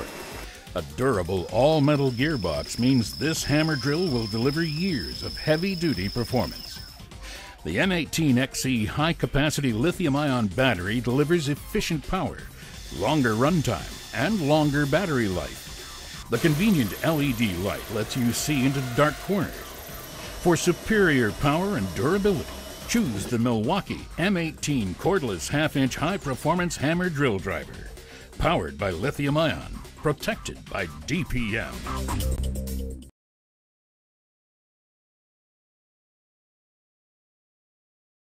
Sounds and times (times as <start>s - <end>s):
Music: 0.0s - 33.1s
Speech: 0.7s - 6.8s, 7.6s - 15.6s, 16.3s - 19.6s, 20.4s - 31.8s.